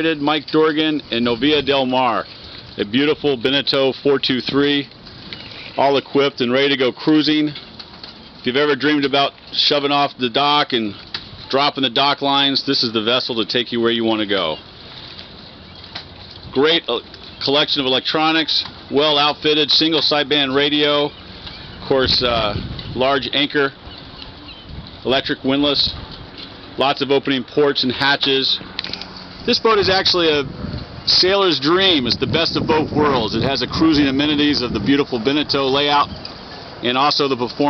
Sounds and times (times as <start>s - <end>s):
Speech: 0.0s - 4.9s, 5.8s - 7.6s, 8.5s - 14.6s, 16.5s - 21.1s, 21.8s - 23.8s, 25.0s - 26.0s, 26.8s - 28.6s, 29.5s - 30.5s, 31.1s - 36.2s, 36.8s - 37.6s.